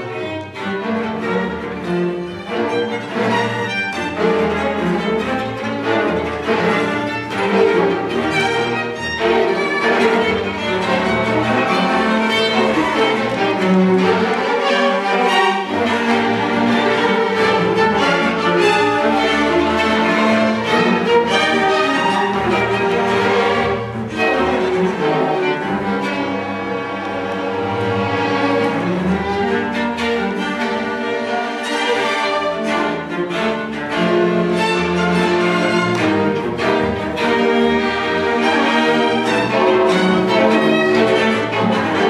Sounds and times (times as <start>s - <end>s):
Orchestra: 0.0s - 42.1s
Violin, fiddle: 0.0s - 42.1s.